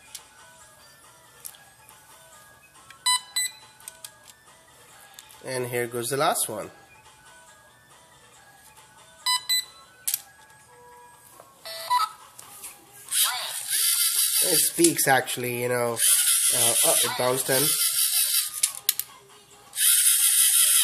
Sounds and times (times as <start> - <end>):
Inside, small room: 0.0 - 20.8
Music: 0.0 - 20.8
Speech: 5.4 - 6.8, 14.4 - 17.8.